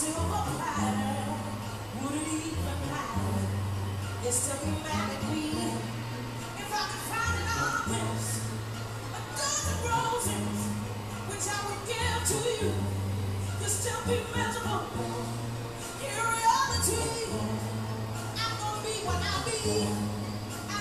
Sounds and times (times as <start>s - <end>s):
Blues: 0.0s - 20.8s.